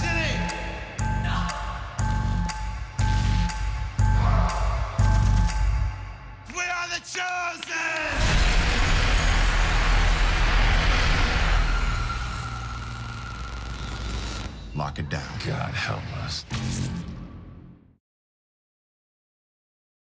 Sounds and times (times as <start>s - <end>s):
Music: 0.0s - 7.2s, 8.1s - 18.0s
Speech: 14.8s - 16.5s.